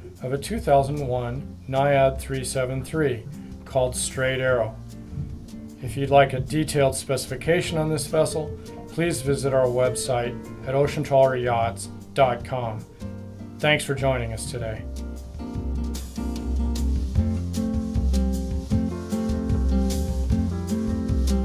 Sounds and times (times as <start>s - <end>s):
Music: 0.0s - 21.4s
Speech: 0.2s - 4.8s, 5.8s - 12.9s, 13.6s - 14.9s.